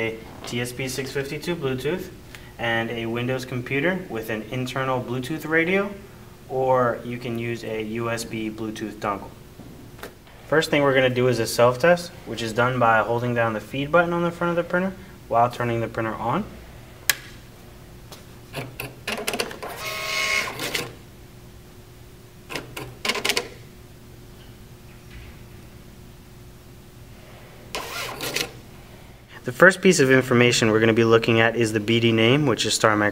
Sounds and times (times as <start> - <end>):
Speech: 0.0 - 9.4, 10.5 - 16.6, 29.4 - 33.1
Printer: 18.5 - 21.0, 22.5 - 23.6, 27.7 - 28.6.